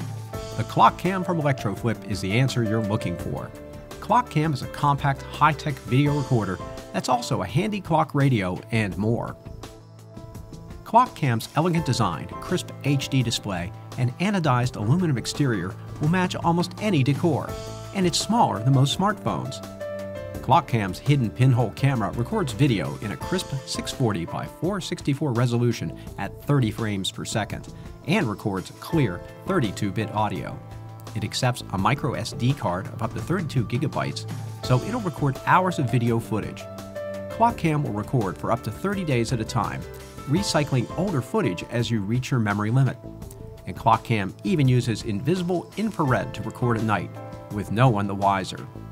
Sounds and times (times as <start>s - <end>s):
Music: 0.0s - 48.9s
Speech: 0.6s - 9.4s, 10.9s - 19.6s, 20.4s - 36.6s, 37.4s - 43.0s, 43.6s - 48.7s.